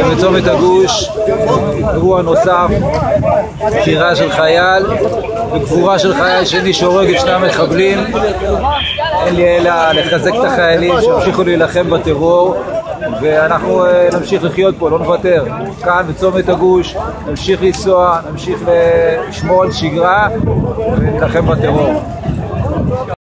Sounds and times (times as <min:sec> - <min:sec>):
Speech: 0:00.0 - 0:23.2.